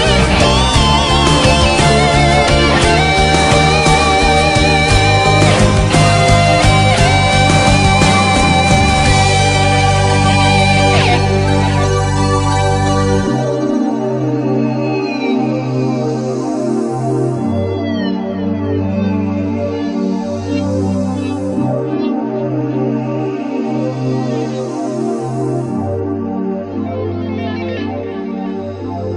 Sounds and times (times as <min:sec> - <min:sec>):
Music: 0:00.0 - 0:29.1.